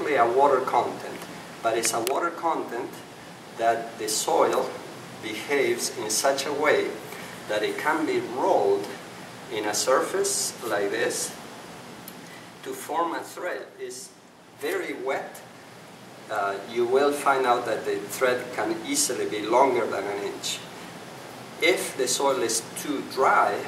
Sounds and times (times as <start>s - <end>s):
Speech: 0.0s - 11.4s, 12.6s - 15.5s, 16.3s - 20.7s, 21.6s - 23.6s.